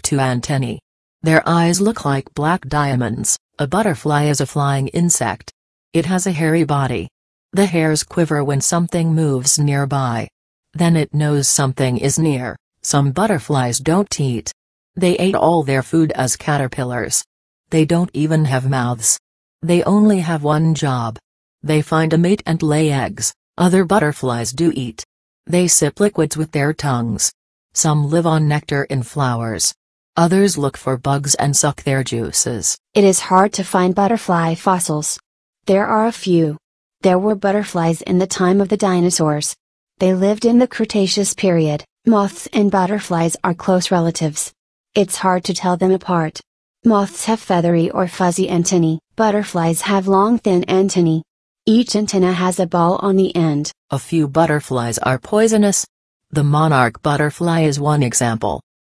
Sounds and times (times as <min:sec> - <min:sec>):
Speech: 0:00.0 - 0:58.6.